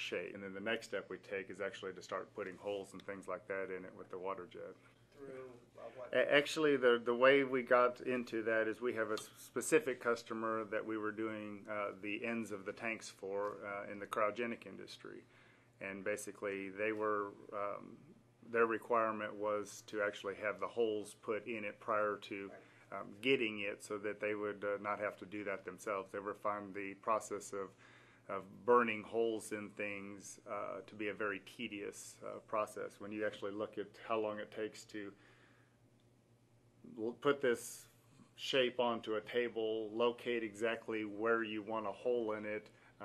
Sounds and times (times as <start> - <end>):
Speech: 0.0 - 15.2, 15.8 - 35.2, 36.9 - 43.0.